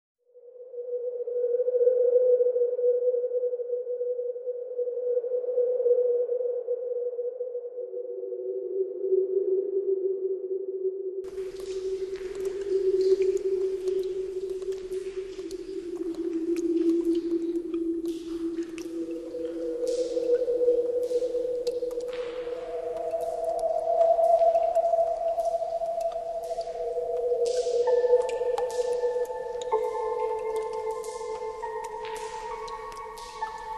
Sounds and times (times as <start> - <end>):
Sonar: 0.3 - 33.7.